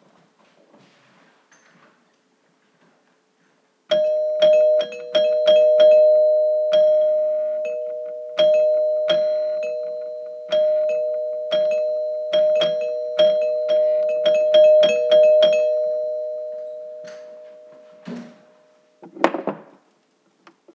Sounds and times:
Door: 0:18.0 - 0:18.4.

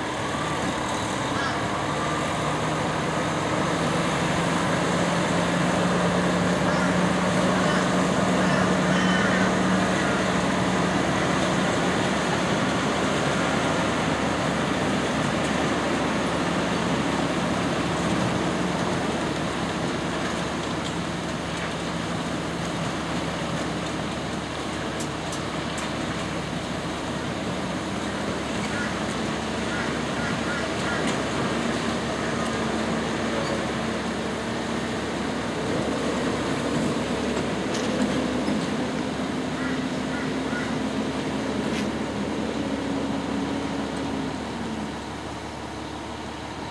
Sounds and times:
Vehicle: 0:00.0 - 0:46.7.

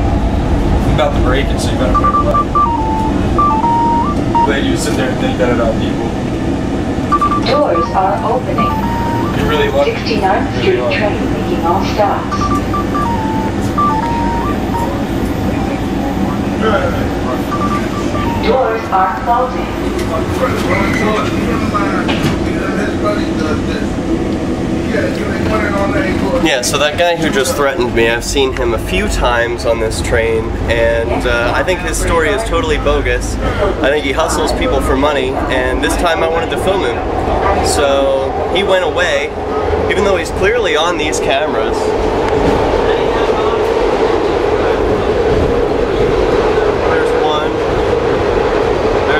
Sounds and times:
Speech: 0:07.4 - 0:08.7, 0:09.4 - 0:12.5, 0:24.9 - 0:41.9.

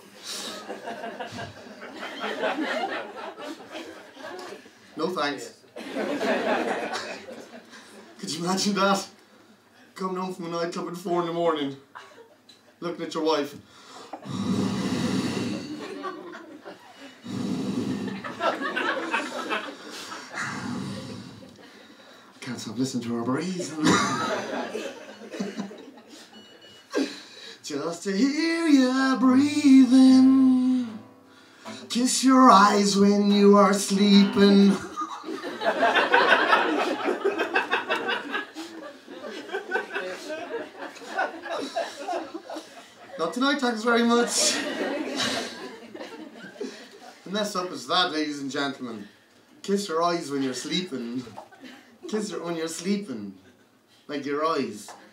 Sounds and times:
Snicker: 0:00.5 - 0:04.7, 0:05.8 - 0:08.1, 0:15.6 - 0:17.2, 0:18.0 - 0:20.5, 0:23.8 - 0:26.4, 0:34.8 - 0:43.2, 0:44.4 - 0:47.2
Speech: 0:05.0 - 0:05.6, 0:08.2 - 0:09.2, 0:10.0 - 0:11.8, 0:12.8 - 0:13.6, 0:22.4 - 0:24.3, 0:27.6 - 0:30.4, 0:43.2 - 0:44.7, 0:47.2 - 0:51.4, 0:52.1 - 0:53.4, 0:54.1 - 0:55.0.

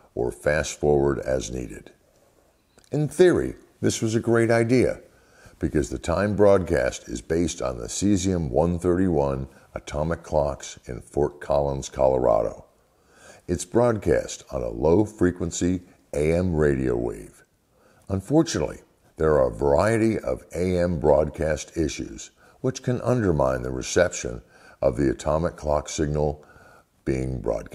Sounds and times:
Speech: 0:00.0 - 0:02.0, 0:02.9 - 0:12.7, 0:13.5 - 0:17.5, 0:18.1 - 0:27.7.

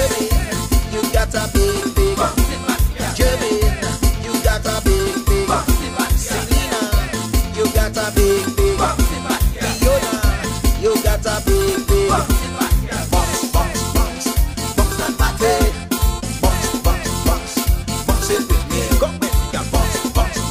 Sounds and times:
Music: 0:00.0 - 0:20.5.

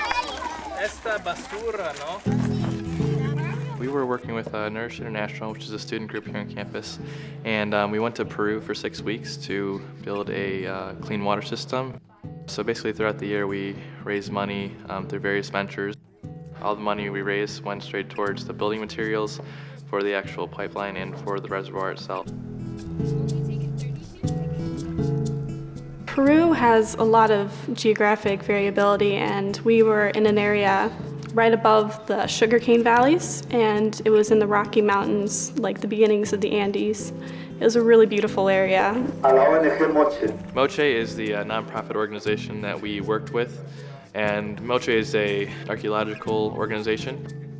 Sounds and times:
Music: 0:02.1 - 0:47.5.

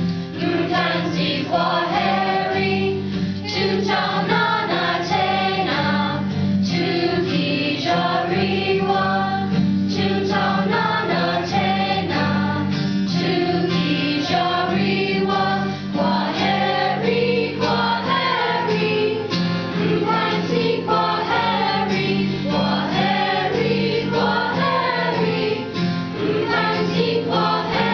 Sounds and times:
Choir: 0:00.3 - 0:27.9.

